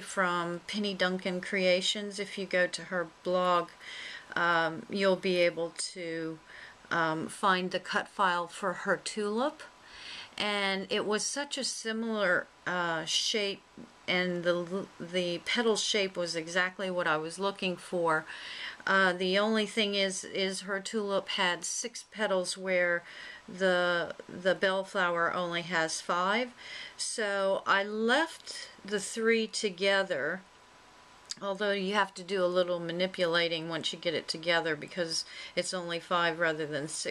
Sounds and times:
Speech: 0.0s - 9.7s, 10.4s - 30.4s, 31.3s - 37.1s.

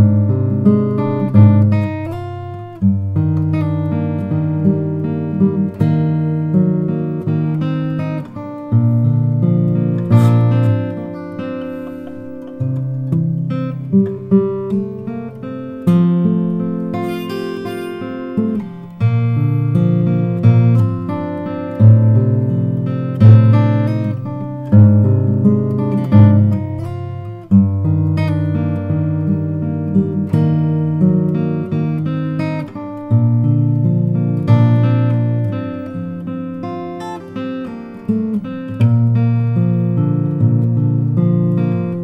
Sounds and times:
Acoustic guitar: 0.0s - 42.0s
Strum: 0.0s - 42.0s.

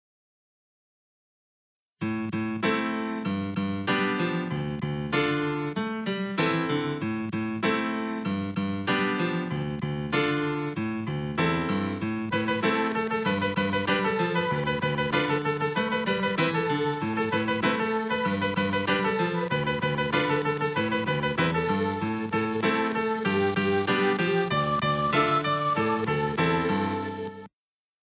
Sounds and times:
Blues: 2.4s - 27.4s.

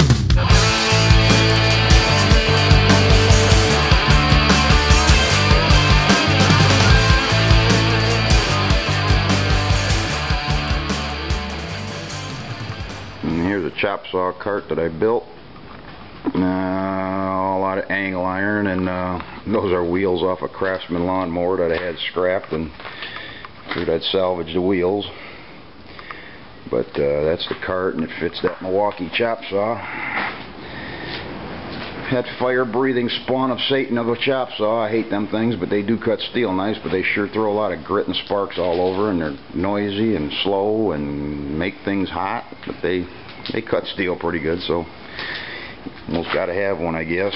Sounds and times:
Speech: 13.2s - 15.4s, 16.3s - 22.8s, 23.7s - 25.2s, 26.7s - 29.9s, 32.0s - 44.9s, 46.1s - 47.3s.

